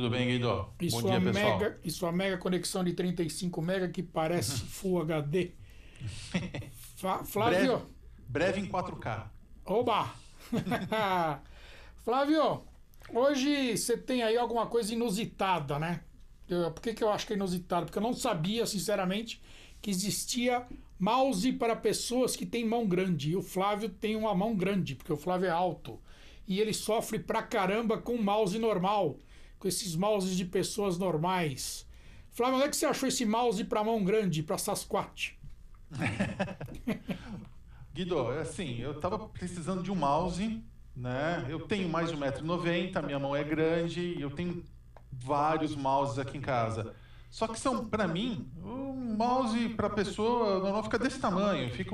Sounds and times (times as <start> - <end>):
Speech: 0.0 - 5.6, 7.0 - 10.2, 12.0 - 35.4, 38.0 - 51.9.